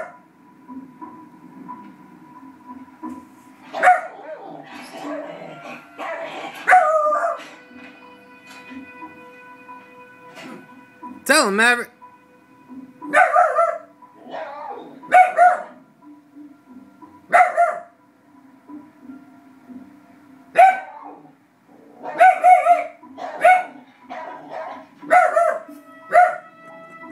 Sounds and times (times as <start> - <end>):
Music: 0.0 - 27.1
Bow-wow: 3.7 - 7.5, 13.1 - 15.8, 17.3 - 17.9, 20.6 - 21.3, 21.9 - 26.5
Speech: 11.3 - 11.9.